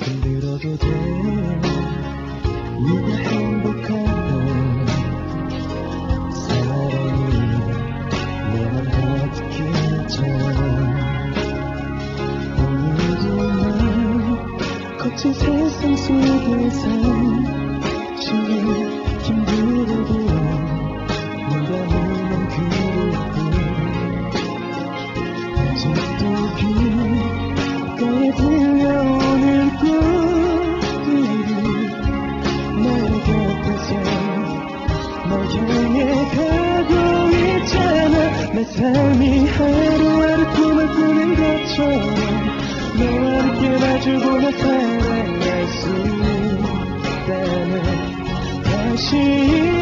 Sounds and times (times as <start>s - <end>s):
Male singing: 0.0s - 2.0s, 2.8s - 5.2s, 6.3s - 11.5s, 12.6s - 24.2s, 25.6s - 27.4s, 28.0s - 32.0s, 32.8s - 49.8s
Music: 0.0s - 49.8s.